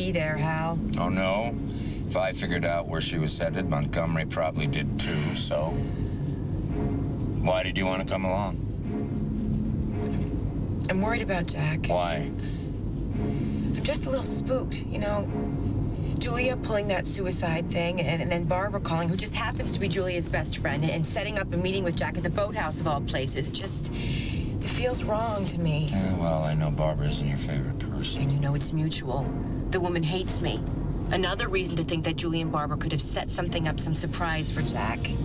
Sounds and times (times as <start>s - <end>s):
Music: 0.0s - 35.2s.